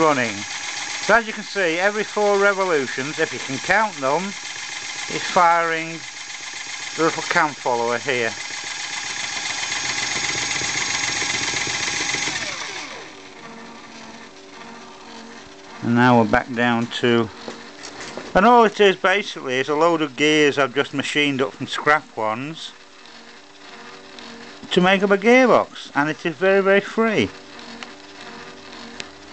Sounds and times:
Engine: 0.0 - 29.3
Speech: 1.1 - 4.4, 5.1 - 6.0, 7.0 - 8.4, 15.8 - 17.3, 18.4 - 22.8, 24.7 - 27.4.

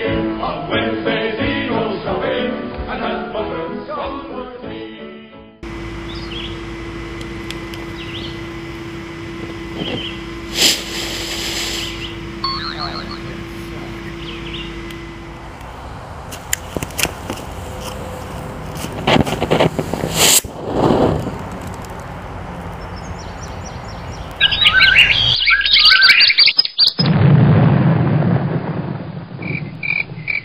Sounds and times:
Chirp, tweet: 14.1 - 14.7, 22.8 - 27.0.

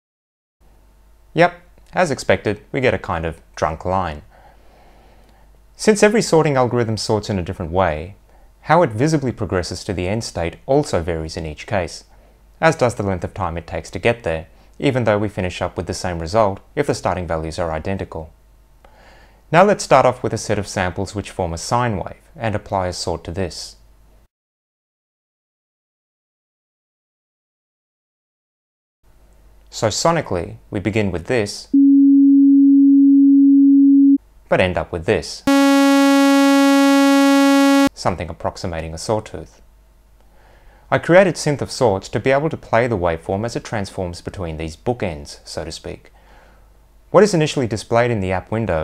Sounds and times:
Speech: 1.4 - 4.3, 5.8 - 18.4, 19.5 - 23.8, 29.7 - 31.7, 34.5 - 35.8, 38.0 - 39.6, 40.9 - 46.1, 47.1 - 48.8.

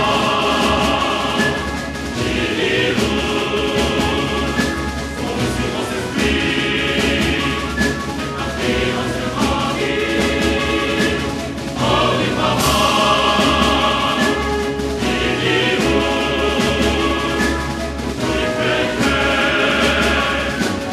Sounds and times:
Music: 0.0 - 20.9.

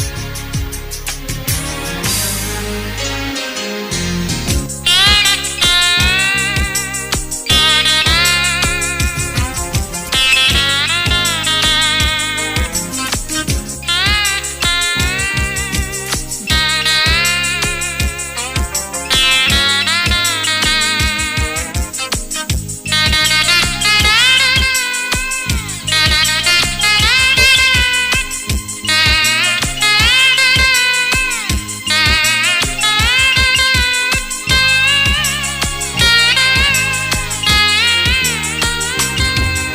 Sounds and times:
Strum: 0.0 - 39.7.

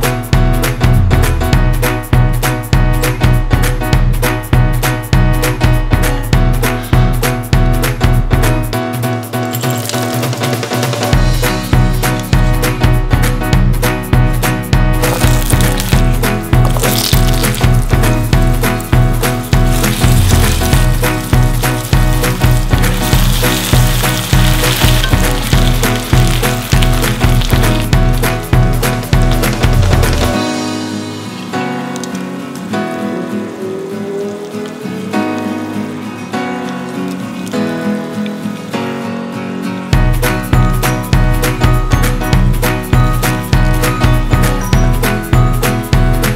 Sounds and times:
Music: 0.0 - 46.3.

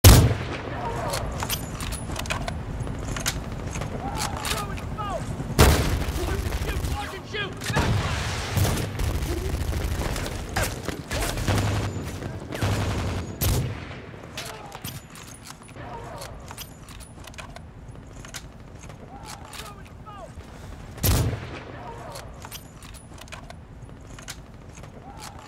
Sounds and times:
Fusillade: 0.0 - 4.8, 5.6 - 15.0.

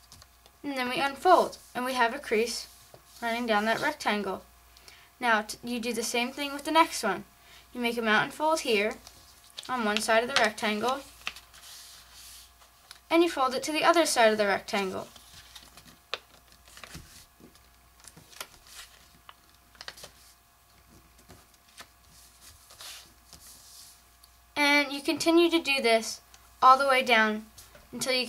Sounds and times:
Speech: 0.7 - 4.4, 5.2 - 7.2, 7.8 - 9.0, 9.7 - 11.1, 13.1 - 15.1, 24.6 - 28.2.

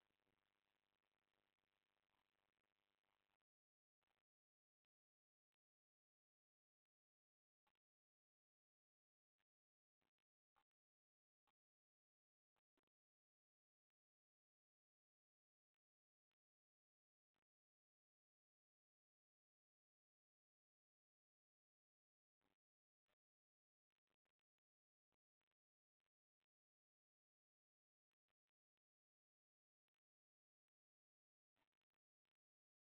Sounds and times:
Silence: 0.0 - 32.8.

